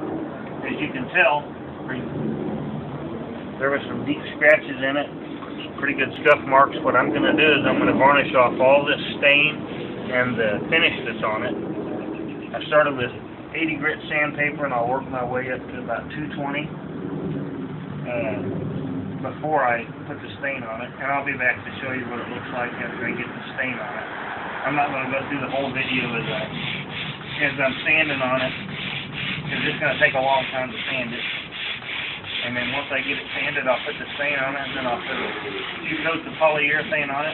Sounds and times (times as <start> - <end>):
Speech: 0.6 - 2.1, 3.6 - 11.6, 12.6 - 16.7, 18.1 - 18.5, 19.2 - 26.5, 27.4 - 28.6, 29.5 - 31.3, 32.4 - 37.3.